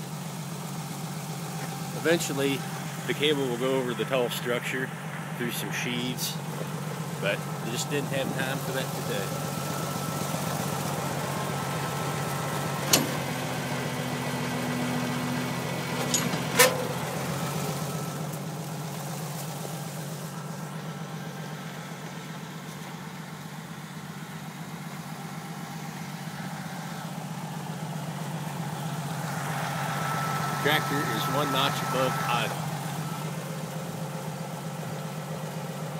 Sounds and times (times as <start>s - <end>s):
Vehicle: 0.0s - 35.9s
Speech: 2.0s - 6.4s, 7.2s - 9.4s, 30.6s - 32.6s.